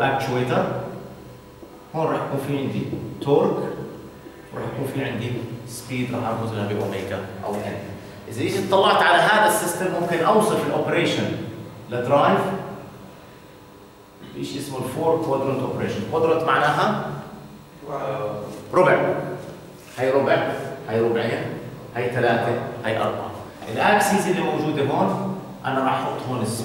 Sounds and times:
Speech: 0:00.0 - 0:01.0, 0:01.9 - 0:12.8, 0:14.2 - 0:26.6.

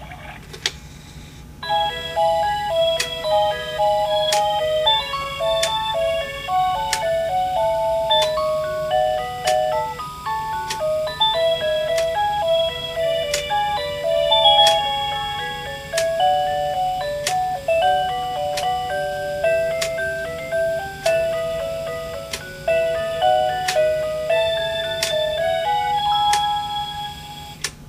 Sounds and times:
Music: 0:01.6 - 0:27.6.

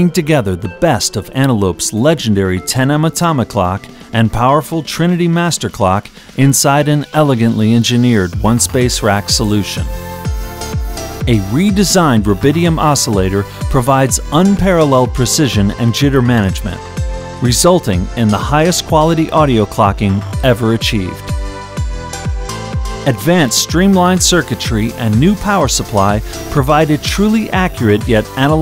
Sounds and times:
Speech: 0:00.0 - 0:09.9, 0:11.3 - 0:16.8, 0:17.4 - 0:21.2, 0:23.1 - 0:28.6
Music: 0:00.0 - 0:28.6.

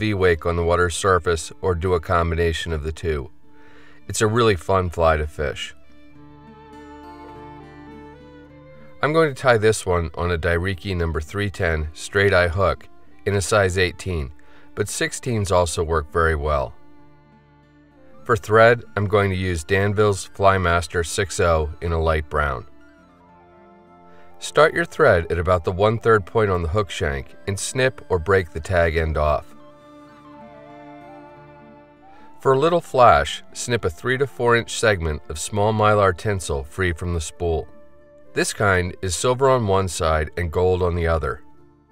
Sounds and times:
Speech: 0:00.0 - 0:03.3, 0:04.1 - 0:05.8, 0:09.0 - 0:16.8, 0:18.2 - 0:22.7, 0:24.4 - 0:29.5, 0:32.4 - 0:37.7, 0:38.4 - 0:41.4
Music: 0:00.0 - 0:41.9.

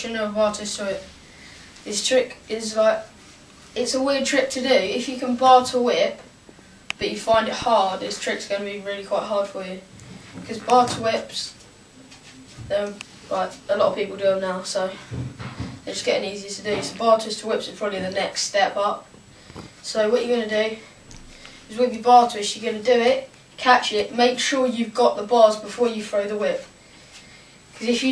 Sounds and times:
Speech: 0:00.0 - 0:01.1, 0:01.8 - 0:03.1, 0:03.8 - 0:06.3, 0:07.0 - 0:11.6, 0:12.6 - 0:15.1, 0:15.8 - 0:19.1, 0:19.8 - 0:20.9, 0:21.7 - 0:26.7, 0:27.8 - 0:28.1.

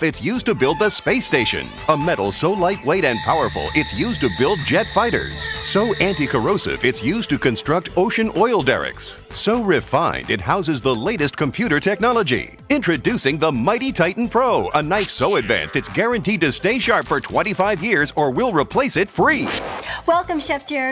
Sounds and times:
Music: 0:00.0 - 0:20.9
Speech: 0:00.0 - 0:20.9.

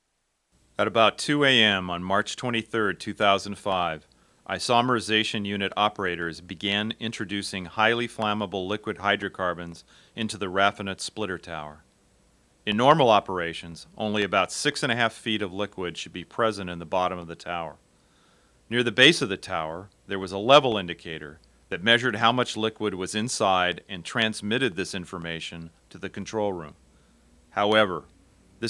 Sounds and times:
Speech: 0:00.8 - 0:11.8, 0:12.7 - 0:17.8, 0:18.7 - 0:26.8, 0:27.6 - 0:28.7.

